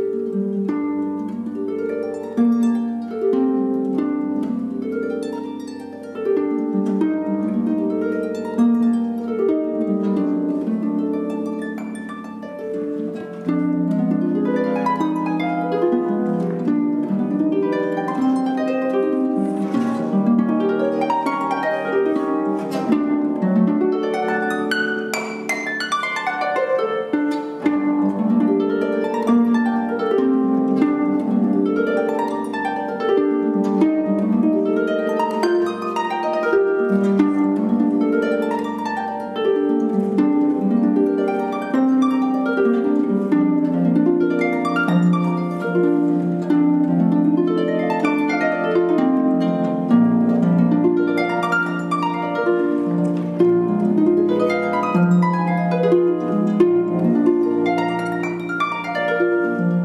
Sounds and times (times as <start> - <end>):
Harp: 0.0 - 59.8
Plucked string instrument: 0.0 - 59.8.